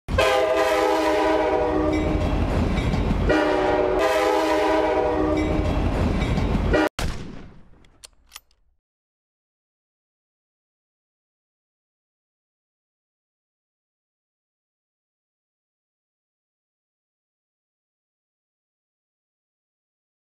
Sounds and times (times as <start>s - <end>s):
Train horn: 0.1s - 2.4s, 3.3s - 5.7s
Railroad car, train wagon: 0.1s - 6.9s
Subway, metro, underground: 0.1s - 6.9s.